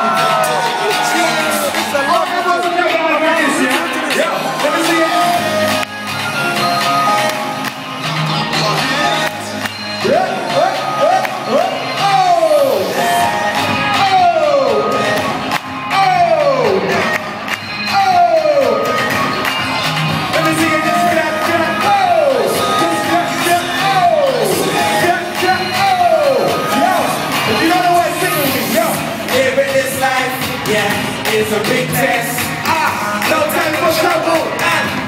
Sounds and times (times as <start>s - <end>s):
Gospel music: 0.0s - 35.0s.